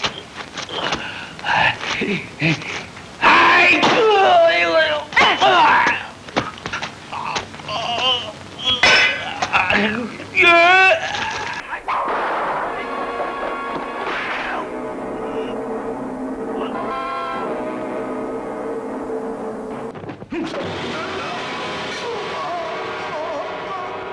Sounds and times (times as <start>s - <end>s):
Music: 12.0s - 20.0s, 20.6s - 24.1s
Speech: 20.3s - 24.1s.